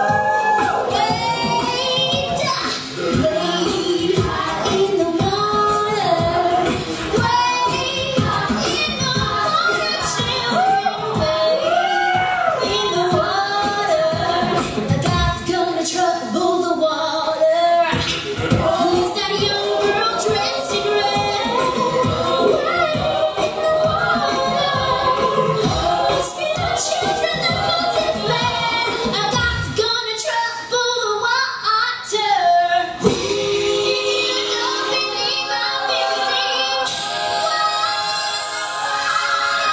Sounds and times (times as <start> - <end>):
Female singing: 0.0 - 39.7
Music: 0.0 - 39.7.